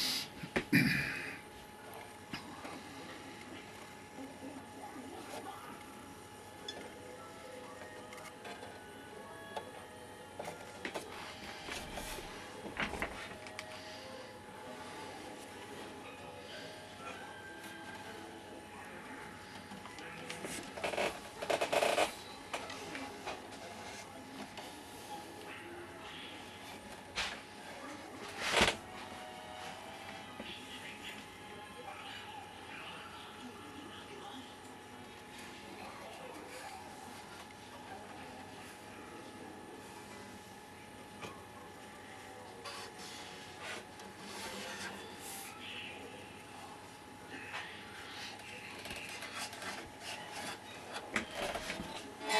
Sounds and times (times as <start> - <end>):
Speech: 30.2 - 52.3.